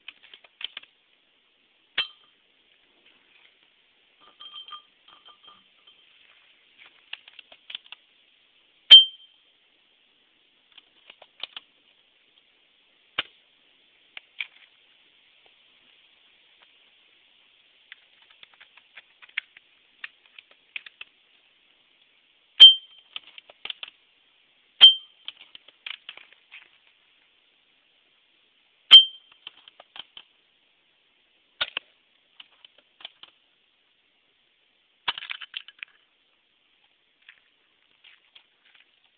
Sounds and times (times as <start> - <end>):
Chink, clink: 2.0 - 2.4, 4.2 - 6.1, 8.9 - 9.4, 22.6 - 23.1, 24.8 - 25.2, 28.9 - 29.4.